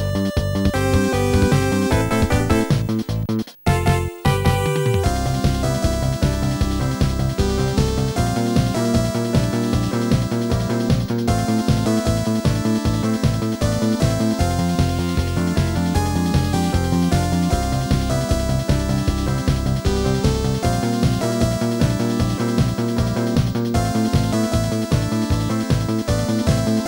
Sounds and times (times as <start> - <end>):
Video game music: 0.0 - 26.8.